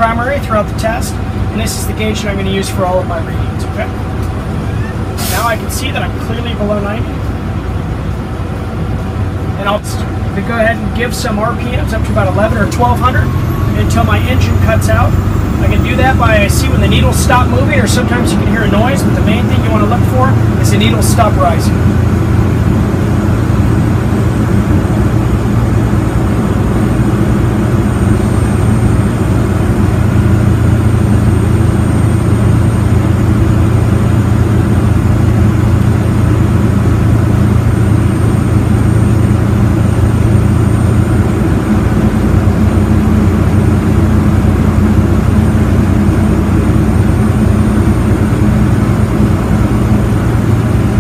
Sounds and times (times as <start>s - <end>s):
Speech: 0.0s - 4.0s, 5.2s - 7.2s, 9.6s - 21.8s.